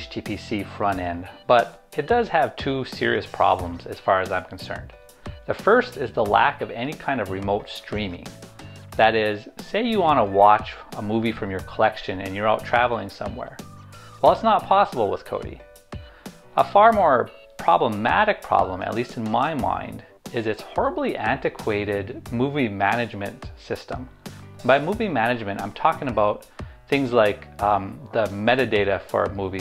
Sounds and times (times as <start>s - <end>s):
Speech: 0.0s - 8.4s, 9.0s - 13.6s, 14.2s - 15.6s, 16.6s - 29.6s
Music: 0.0s - 29.6s.